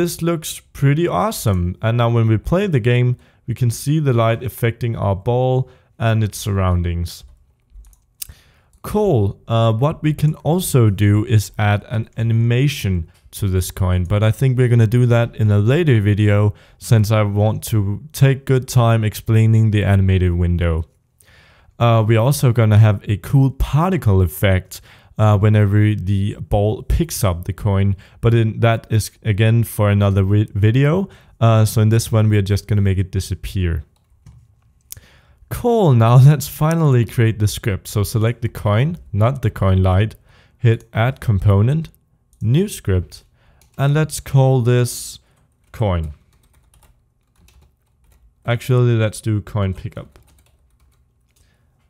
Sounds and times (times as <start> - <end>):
Typing: 7.3 - 8.1, 45.6 - 48.3, 49.8 - 51.5.